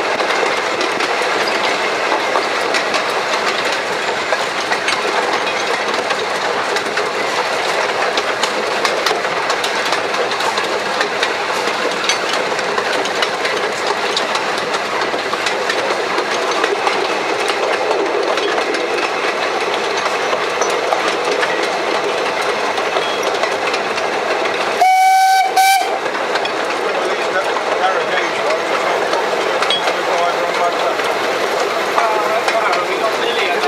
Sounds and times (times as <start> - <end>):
Train whistle: 24.8 - 26.0
Speech: 27.0 - 29.1, 29.8 - 31.1, 31.9 - 33.6.